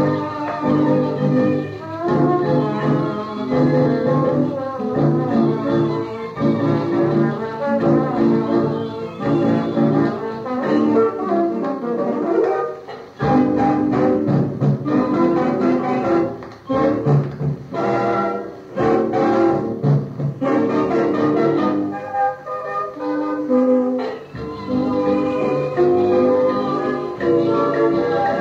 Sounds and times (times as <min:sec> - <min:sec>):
Music: 0:00.0 - 0:28.4.